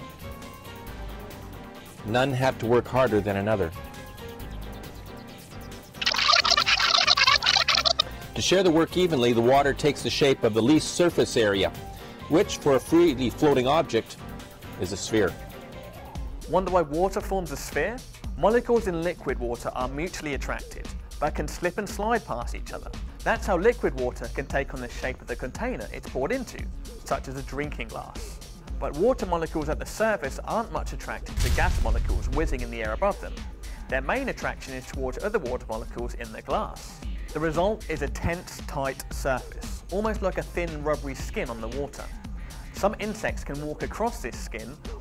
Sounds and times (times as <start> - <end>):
Music: 0.0 - 45.0
Speech: 2.0 - 3.8, 8.4 - 14.2, 14.8 - 15.4, 16.5 - 42.2, 42.8 - 44.8.